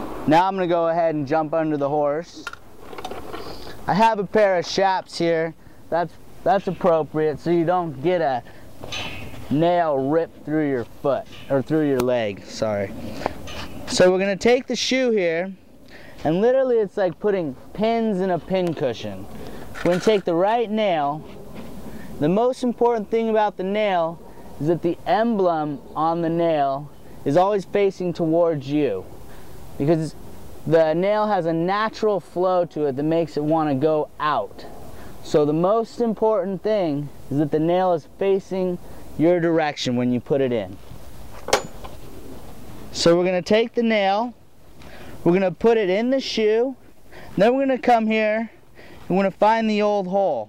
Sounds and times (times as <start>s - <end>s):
Speech: 0.3s - 2.5s, 3.9s - 8.5s, 9.5s - 13.0s, 13.9s - 15.6s, 16.2s - 21.2s, 22.2s - 29.1s, 29.8s - 40.8s, 42.9s - 44.4s, 45.2s - 46.8s, 47.4s - 50.4s.